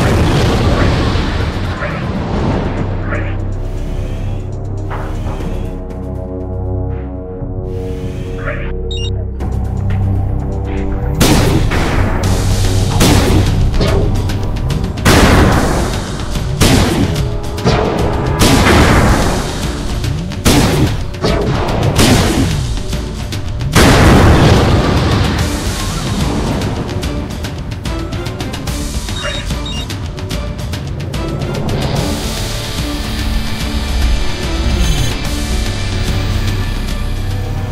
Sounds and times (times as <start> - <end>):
Boom: 0.0 - 2.9, 23.8 - 25.4
Music: 0.0 - 37.7.